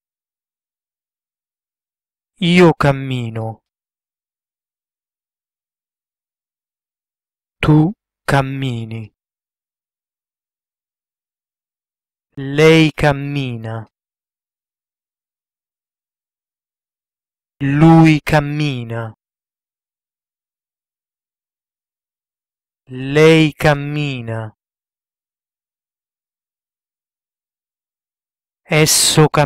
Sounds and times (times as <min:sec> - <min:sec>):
Speech: 0:02.4 - 0:03.6, 0:07.6 - 0:09.2, 0:12.4 - 0:14.0, 0:17.6 - 0:19.2, 0:22.9 - 0:24.6, 0:28.7 - 0:29.4.